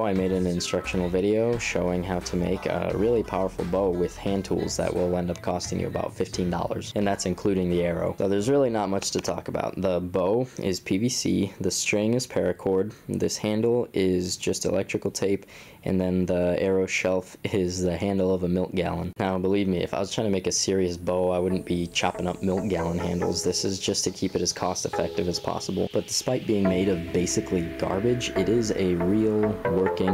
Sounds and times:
Speech: 0:00.0 - 0:30.1.

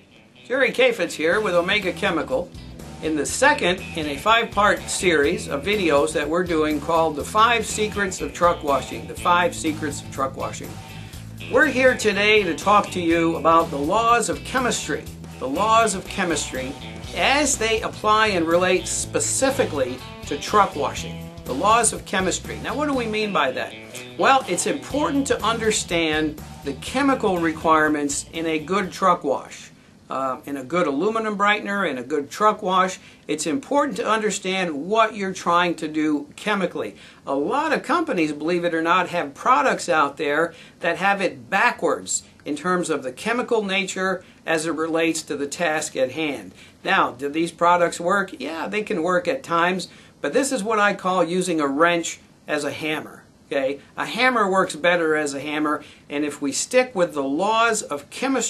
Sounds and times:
Speech: 0:00.5 - 0:10.8, 0:11.5 - 0:58.5.

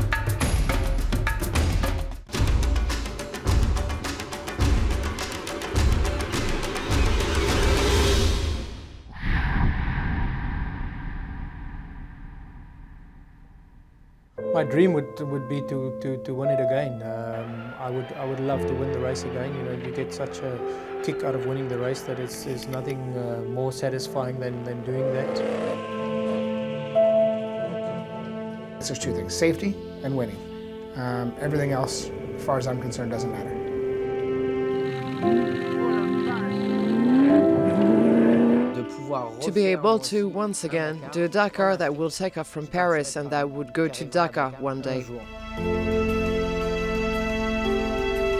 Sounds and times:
Music: 0:00.0 - 0:09.1, 0:14.3 - 0:48.3.

